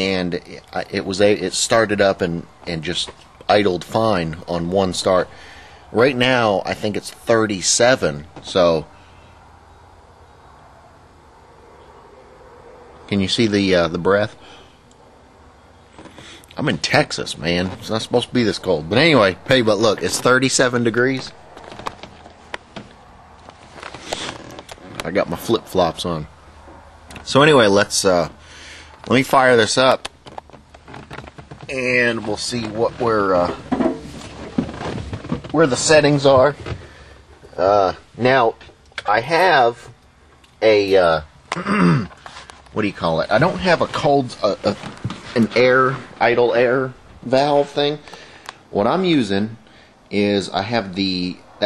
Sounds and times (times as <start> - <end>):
Speech: 0.0 - 8.9, 13.1 - 14.4, 16.6 - 21.4, 25.0 - 26.3, 27.2 - 28.4, 29.1 - 30.0, 31.6 - 33.7, 35.5 - 36.7, 37.5 - 40.0, 40.6 - 42.0, 42.8 - 48.0, 48.7 - 51.6.